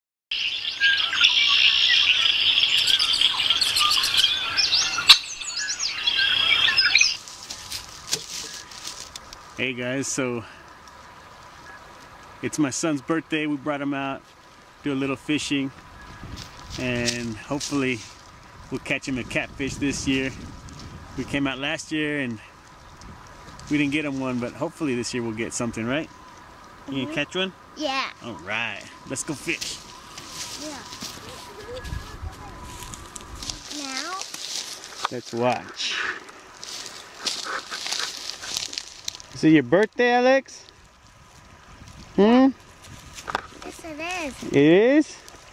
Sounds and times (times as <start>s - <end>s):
Patter: 7.2s - 9.6s, 36.2s - 39.4s.